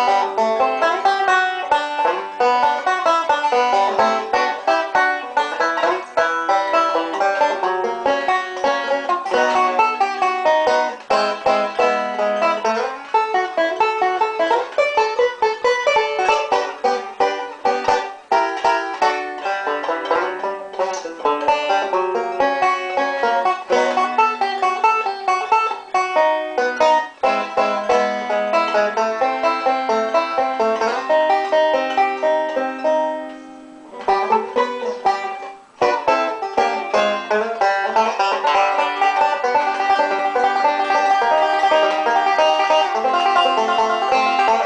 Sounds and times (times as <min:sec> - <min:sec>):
Banjo: 0:00.0 - 0:44.6.